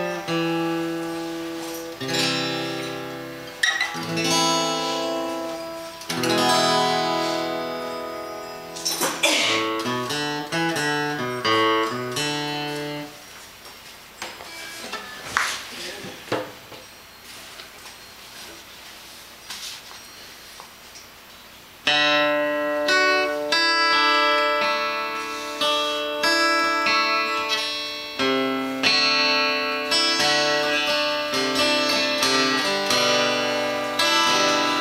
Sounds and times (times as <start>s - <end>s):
Music: 0.0s - 13.2s, 14.4s - 15.5s, 21.9s - 34.8s.